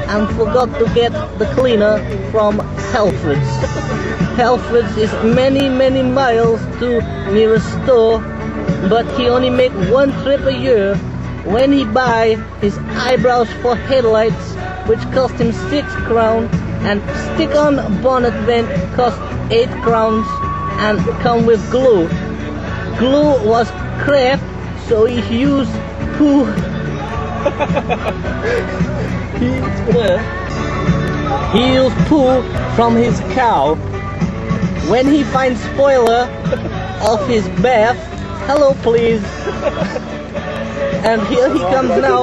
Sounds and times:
Speech: 0.0 - 3.6, 8.8 - 22.1, 31.5 - 33.8, 34.8 - 36.3, 37.0 - 39.3, 41.0 - 42.2
Music: 0.0 - 42.2.

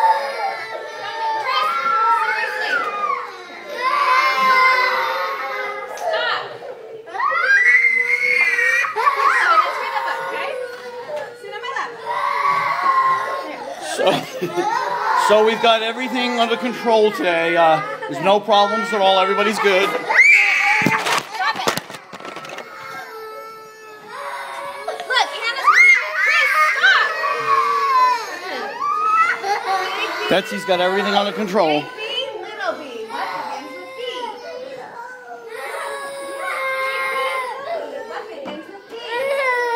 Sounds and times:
Baby cry, infant cry: 17.7 - 39.7.

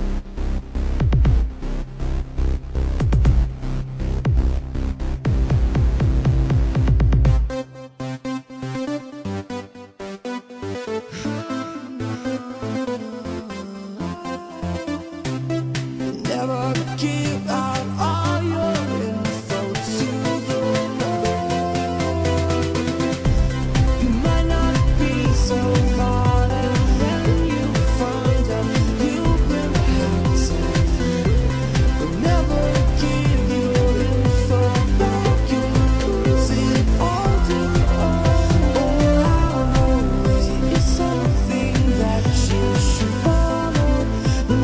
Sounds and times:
Pop music: 0.0 - 44.6.

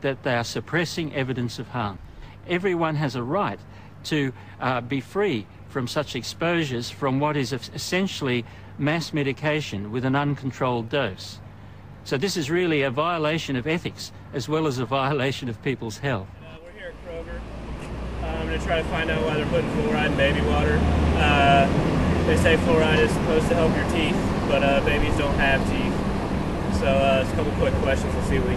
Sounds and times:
Speech: 0.0 - 11.4, 12.0 - 17.4, 18.2 - 21.7, 22.3 - 26.0, 26.7 - 28.5.

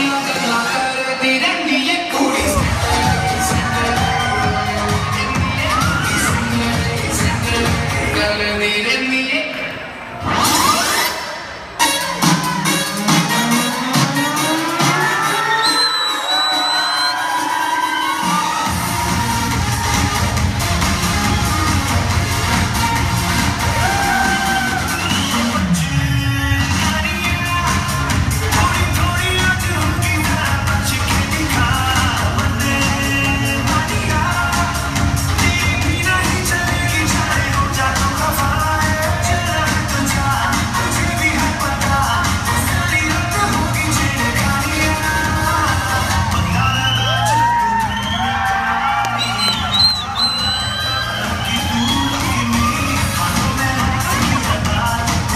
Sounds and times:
Inside, large room or hall: 0.0 - 55.3
Music: 0.0 - 55.3.

